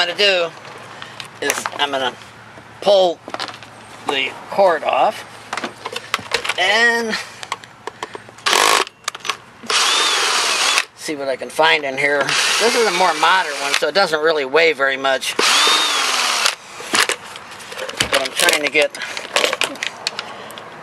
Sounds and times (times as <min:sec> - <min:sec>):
Power tool: 0:08.5 - 0:08.9, 0:09.7 - 0:10.9, 0:12.3 - 0:13.8, 0:15.4 - 0:16.6.